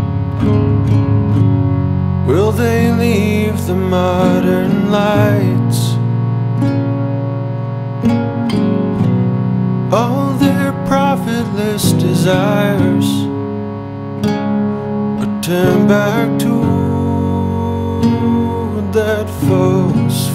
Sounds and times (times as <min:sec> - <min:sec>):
Effects unit: 0:00.0 - 0:20.3
Music: 0:00.0 - 0:20.3.